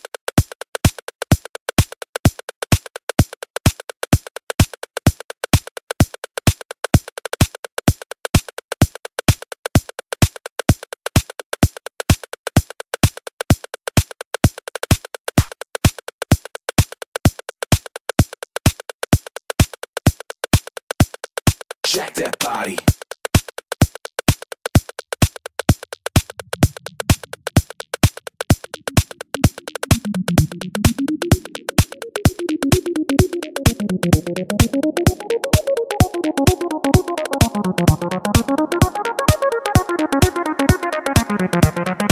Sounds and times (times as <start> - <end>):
House music: 21.8 - 22.9, 26.2 - 42.1.